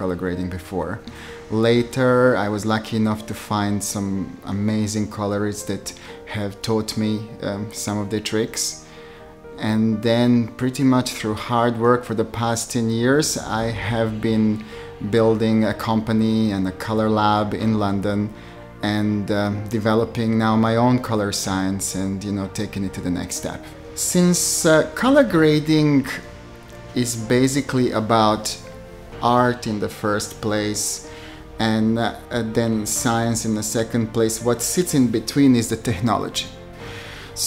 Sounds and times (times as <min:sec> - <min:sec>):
Speech: 0:00.0 - 0:08.8, 0:09.6 - 0:26.3, 0:27.0 - 0:28.6, 0:29.2 - 0:36.6
Music: 0:00.0 - 0:37.4.